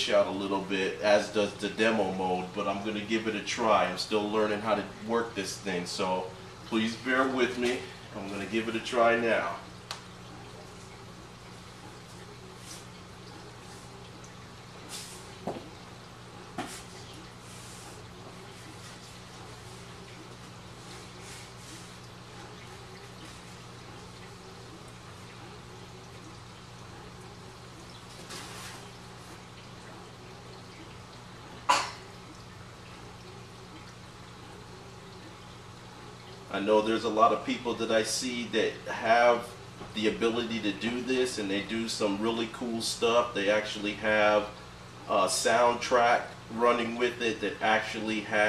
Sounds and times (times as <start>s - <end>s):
Speech: 0.0s - 9.7s, 36.5s - 48.4s.